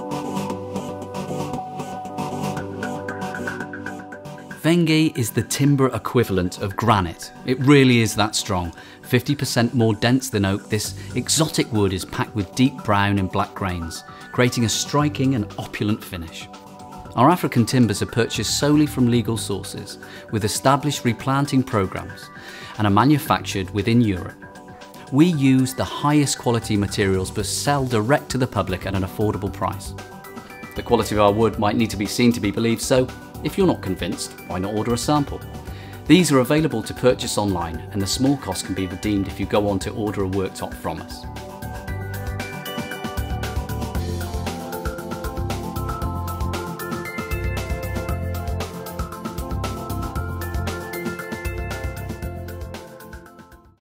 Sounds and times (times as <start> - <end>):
Music: 0.0 - 53.8
Speech: 4.6 - 16.5, 17.2 - 24.4, 25.1 - 30.0, 30.8 - 35.4, 36.1 - 41.3.